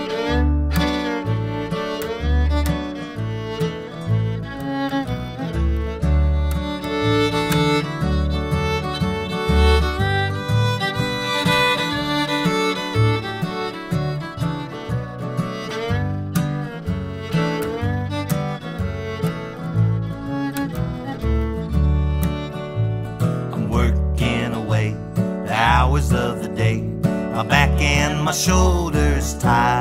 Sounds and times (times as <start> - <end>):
Music: 0.0 - 29.8.